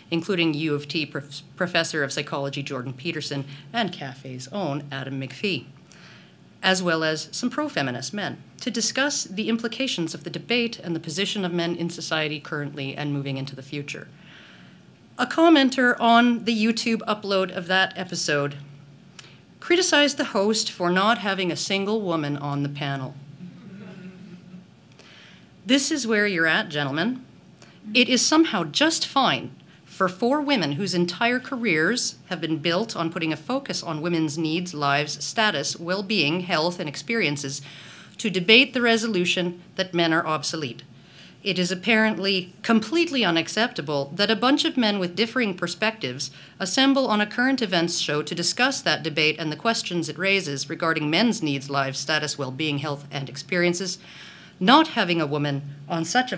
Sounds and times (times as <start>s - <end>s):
Speech: 0.1s - 5.7s, 6.6s - 14.1s, 15.2s - 18.7s, 19.6s - 24.2s, 25.7s - 27.3s, 27.9s - 37.6s, 41.5s - 54.0s, 54.6s - 56.3s.